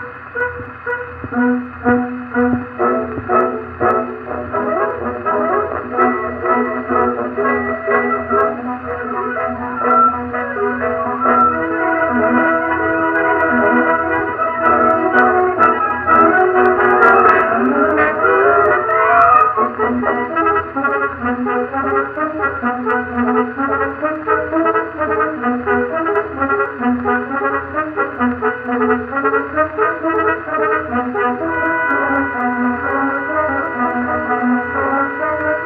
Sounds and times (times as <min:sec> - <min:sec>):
French horn: 0:00.0 - 0:35.6
Trombone: 0:00.0 - 0:35.6.